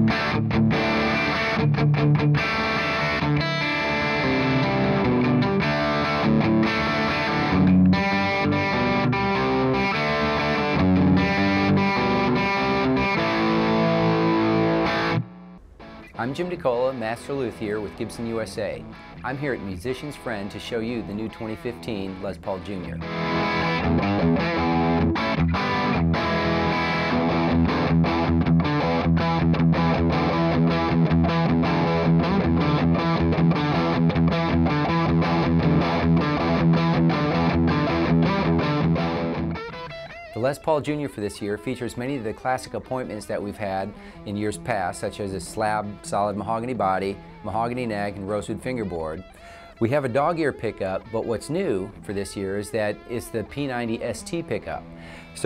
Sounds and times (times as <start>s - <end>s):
Guitar: 0.0s - 55.4s.